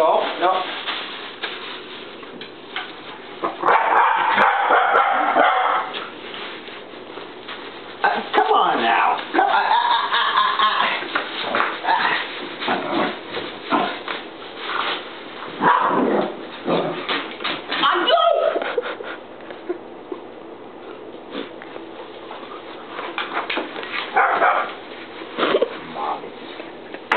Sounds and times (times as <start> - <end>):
Speech: 0.0 - 0.8, 8.0 - 9.7, 17.8 - 18.6.